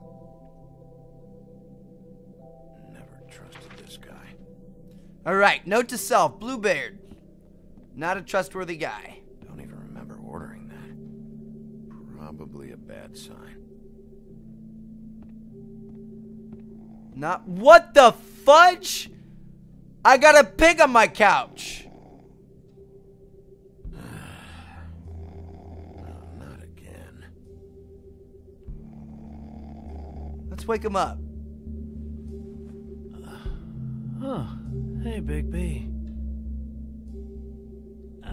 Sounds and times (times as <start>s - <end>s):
Inside, small room: 0.0s - 38.3s
Speech: 2.8s - 4.4s, 5.3s - 7.0s, 8.0s - 11.0s, 12.0s - 13.6s, 17.2s - 19.1s, 20.1s - 21.9s, 26.0s - 27.3s, 30.5s - 31.2s, 34.2s - 35.9s.